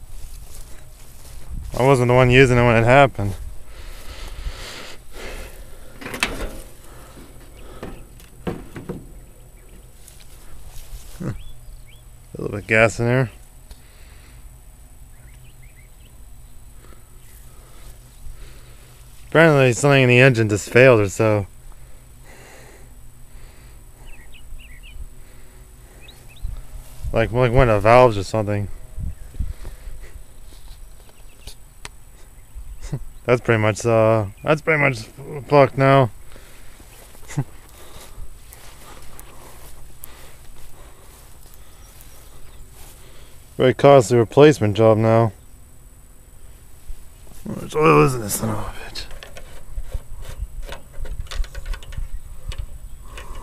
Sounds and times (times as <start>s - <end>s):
Speech: 1.7s - 3.4s, 12.3s - 13.4s, 19.3s - 21.5s, 27.1s - 28.7s, 32.9s - 36.1s, 43.6s - 45.4s, 47.4s - 49.1s
Bird: 8.9s - 12.8s, 15.1s - 17.9s, 24.0s - 25.0s, 25.9s - 26.7s, 30.3s - 33.3s.